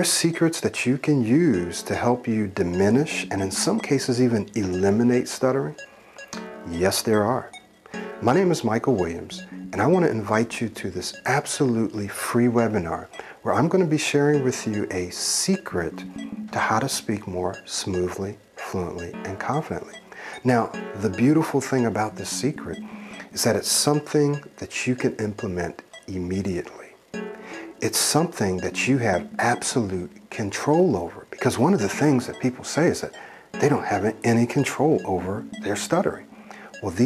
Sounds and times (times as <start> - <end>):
Male speech, man speaking: 0.0 - 5.8, 6.7 - 7.6, 8.2 - 16.0, 16.6 - 27.0, 27.8 - 37.0
Music: 0.0 - 37.0
Narration, monologue: 0.0 - 37.0.